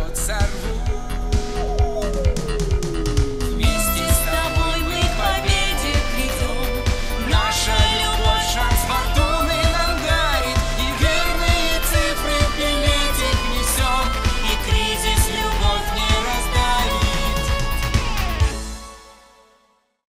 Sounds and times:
Music: 0:00.0 - 0:20.1
Female singing: 0:03.6 - 0:17.6.

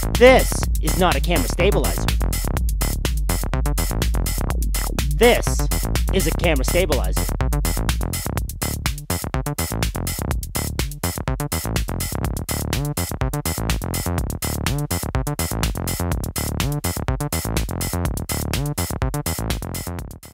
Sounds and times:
Music: 0:00.0 - 0:20.3.

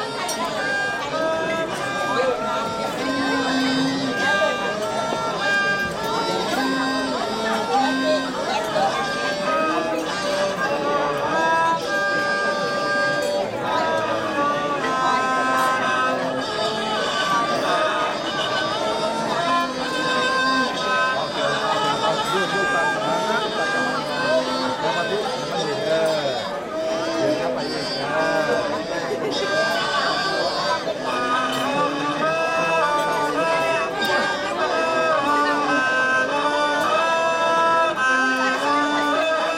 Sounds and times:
Music: 0:00.0 - 0:39.5
Speech: 0:00.0 - 0:39.5.

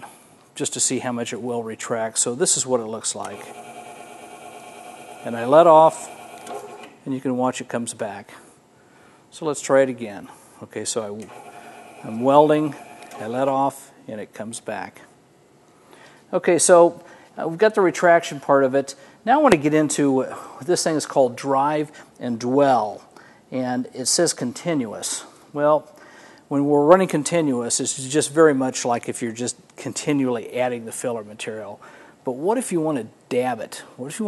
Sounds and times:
Speech: 0:00.6 - 0:03.6, 0:05.2 - 0:06.2, 0:07.0 - 0:08.5, 0:09.3 - 0:11.3, 0:12.0 - 0:15.1, 0:16.3 - 0:25.9, 0:26.5 - 0:34.2.

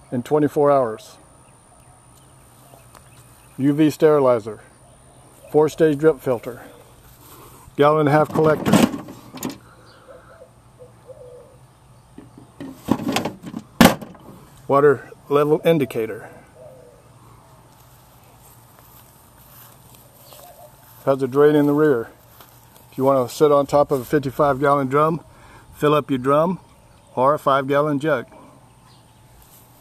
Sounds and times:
Speech: 0:00.0 - 0:01.2, 0:03.6 - 0:04.7, 0:05.5 - 0:06.7, 0:07.8 - 0:08.8, 0:14.7 - 0:16.4, 0:21.0 - 0:22.2, 0:22.9 - 0:25.2, 0:25.8 - 0:26.6, 0:27.2 - 0:28.4.

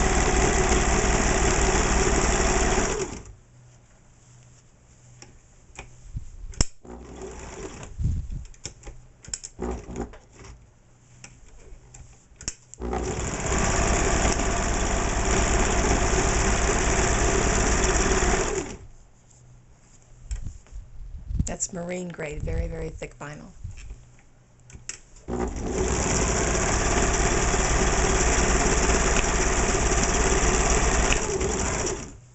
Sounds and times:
Light engine (high frequency): 0:00.0 - 0:03.3, 0:12.8 - 0:18.8, 0:25.3 - 0:32.2
Sewing machine: 0:00.0 - 0:03.3, 0:06.8 - 0:07.9, 0:09.6 - 0:10.1, 0:12.8 - 0:18.9, 0:25.3 - 0:32.2.

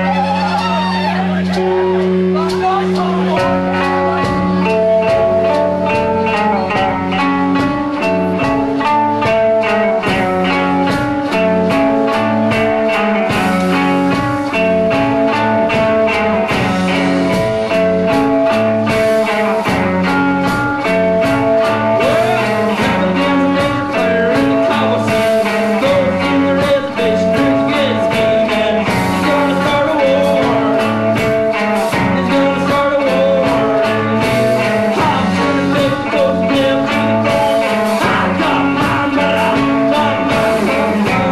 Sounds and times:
Music: 0:00.0 - 0:41.3.

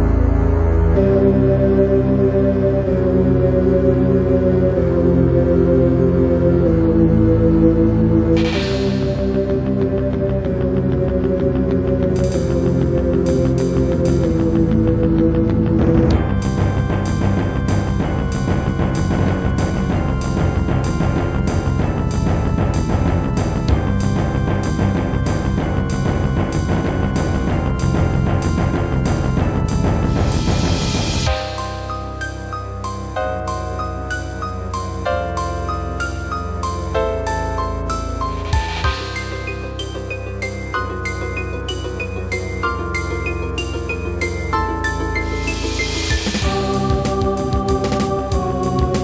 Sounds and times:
Keyboard (musical): 0:00.0 - 0:49.0.

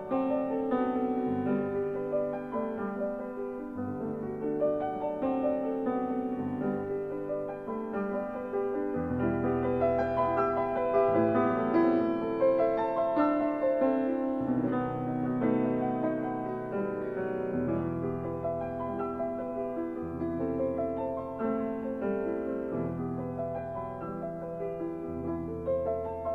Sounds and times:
Music: 0:00.0 - 0:26.3.

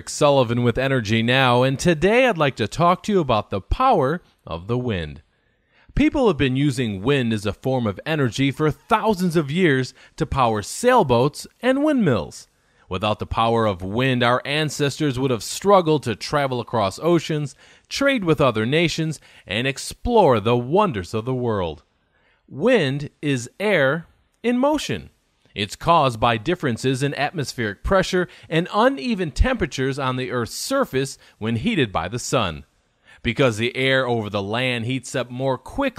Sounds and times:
Speech: 0:00.0 - 0:05.3, 0:05.9 - 0:21.9, 0:22.5 - 0:35.9.

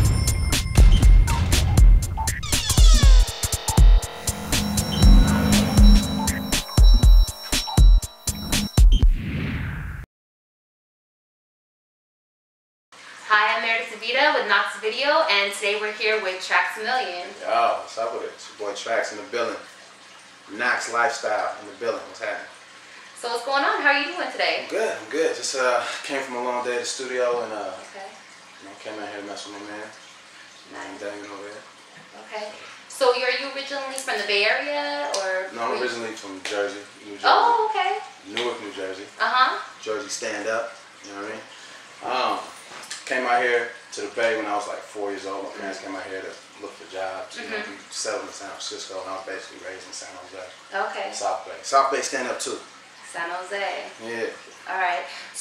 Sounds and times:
Speech: 0:32.3 - 0:39.1, 0:42.0 - 0:42.5, 0:43.1 - 0:52.4, 0:54.0 - 0:55.1.

